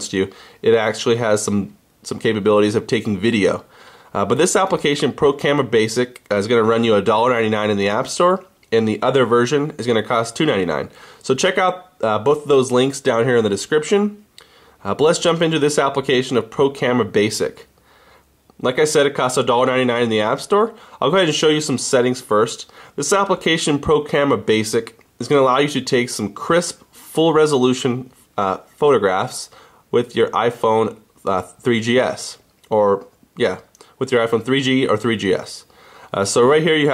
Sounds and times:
Speech: 0:00.0 - 0:14.2, 0:14.8 - 0:17.7, 0:18.6 - 0:36.9.

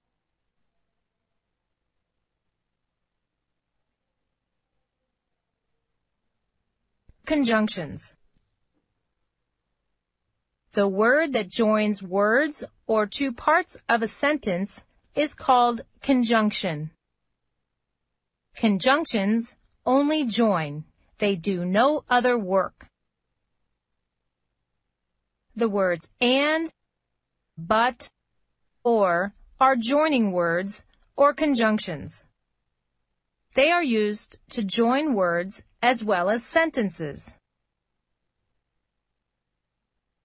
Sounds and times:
Speech: 0:07.3 - 0:08.1, 0:10.8 - 0:17.0, 0:18.6 - 0:22.8, 0:25.6 - 0:26.7, 0:27.6 - 0:28.1, 0:28.9 - 0:32.2, 0:33.6 - 0:37.3.

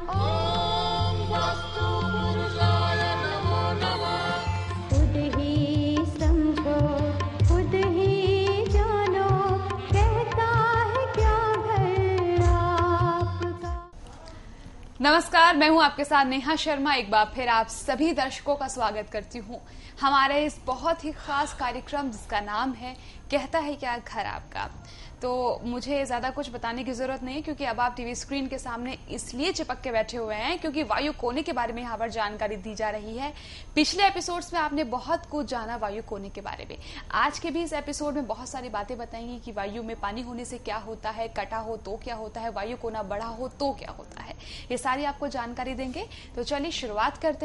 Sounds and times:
Music: 0:00.0 - 0:14.0.

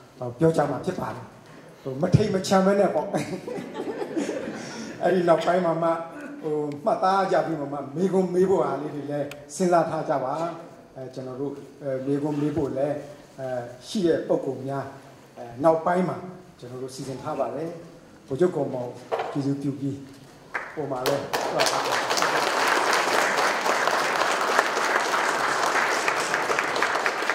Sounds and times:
Narration, monologue: 0:00.0 - 0:22.0
Male speech, man speaking: 0:00.2 - 0:01.3, 0:01.9 - 0:03.4, 0:05.0 - 0:20.1, 0:20.8 - 0:22.0.

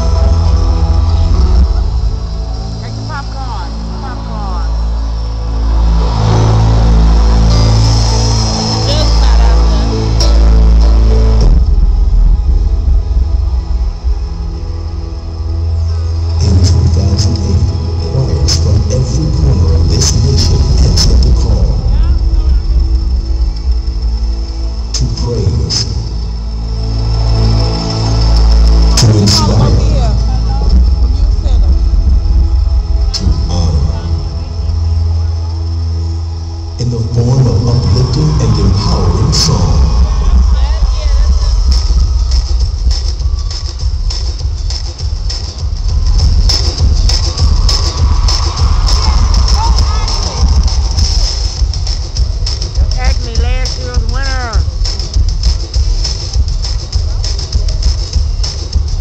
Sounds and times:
Music: 0:00.0 - 0:59.0
Speech: 0:16.4 - 0:22.7, 0:25.0 - 0:25.9, 0:29.0 - 0:30.7, 0:36.8 - 0:41.6, 0:52.8 - 0:54.7.

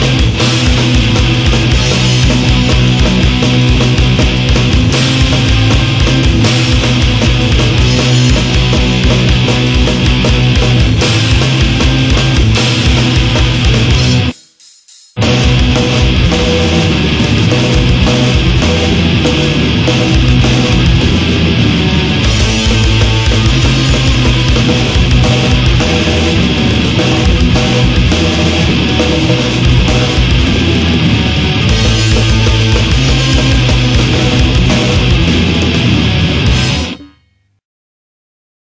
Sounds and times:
Rock music: 0:00.0 - 0:37.1.

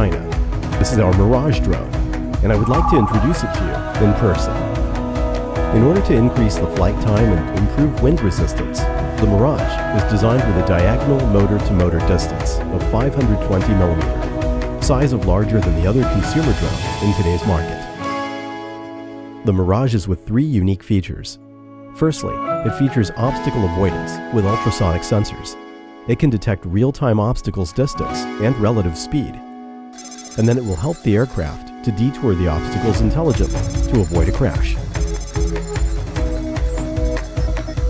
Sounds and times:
Speech: 0:00.0 - 0:04.6, 0:05.7 - 0:14.1, 0:14.8 - 0:17.9, 0:19.4 - 0:21.4, 0:22.0 - 0:29.4, 0:30.4 - 0:34.9
Music: 0:00.0 - 0:37.8.

